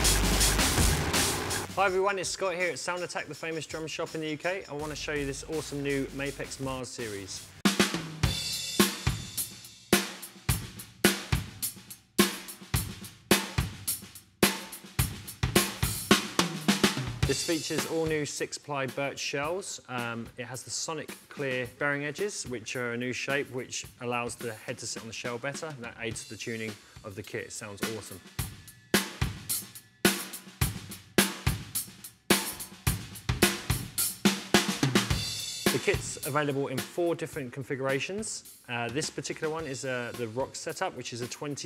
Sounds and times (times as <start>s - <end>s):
Drum: 0.0s - 41.6s
Drum kit: 0.0s - 41.6s
Speech: 1.7s - 7.5s, 17.3s - 28.3s, 35.7s - 41.6s.